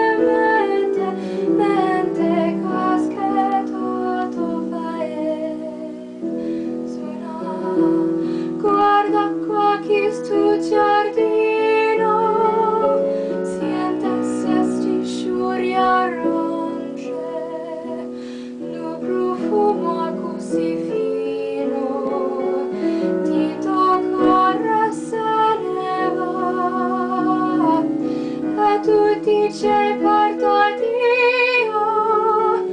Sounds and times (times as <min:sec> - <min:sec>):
Female singing: 0:00.0 - 0:06.3, 0:06.9 - 0:32.7
Music: 0:00.0 - 0:32.7.